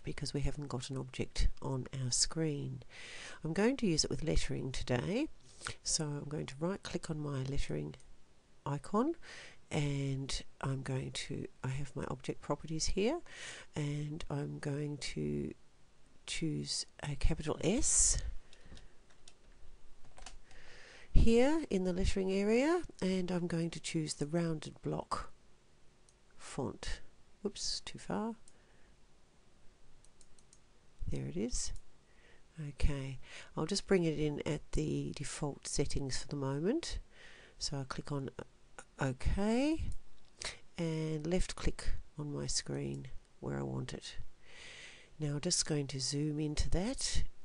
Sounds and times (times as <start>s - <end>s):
Speech: 0.0s - 2.8s, 3.4s - 8.0s, 8.7s - 13.2s, 13.8s - 15.6s, 16.3s - 18.3s, 21.2s - 25.4s, 26.4s - 28.4s, 31.0s - 31.8s, 32.6s - 37.0s, 37.6s - 40.0s, 40.8s - 44.2s, 45.2s - 47.3s.